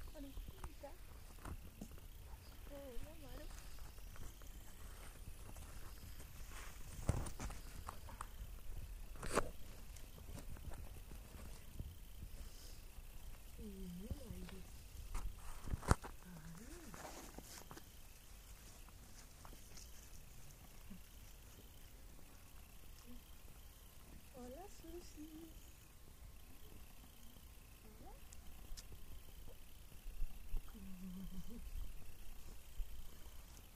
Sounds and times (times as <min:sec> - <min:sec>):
Speech: 0:02.4 - 0:03.5, 0:13.6 - 0:14.7, 0:24.4 - 0:25.6.